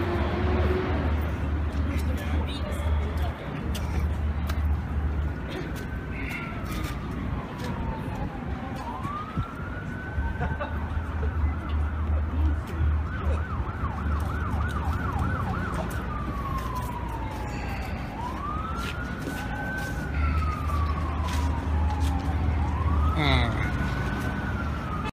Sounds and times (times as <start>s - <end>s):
Outside, urban or manmade: 0.0s - 25.1s
Police car (siren): 4.7s - 25.1s.